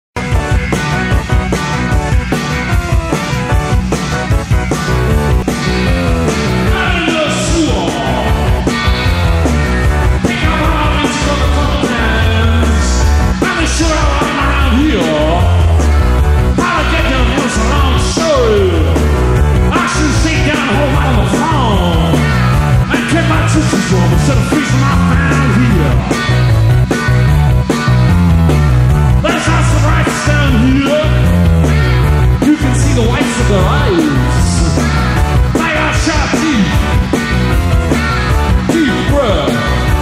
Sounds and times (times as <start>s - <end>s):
Rock and roll: 0.0s - 40.0s.